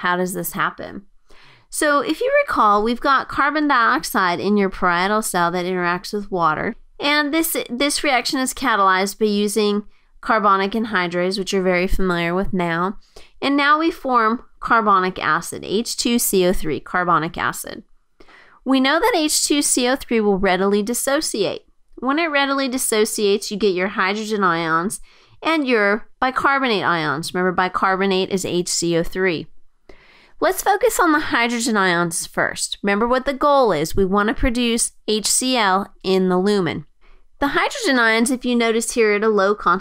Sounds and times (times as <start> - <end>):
Speech: 0.0 - 1.0, 1.7 - 17.8, 18.7 - 29.5, 30.4 - 39.8.